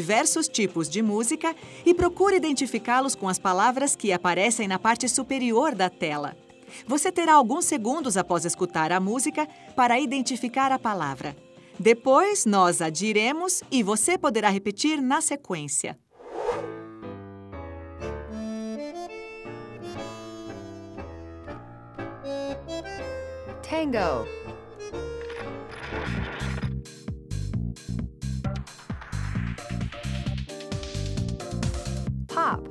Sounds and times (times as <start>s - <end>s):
Music: 0.0s - 15.8s, 16.5s - 32.7s
Speech: 0.0s - 16.0s, 23.7s - 24.3s, 32.3s - 32.7s.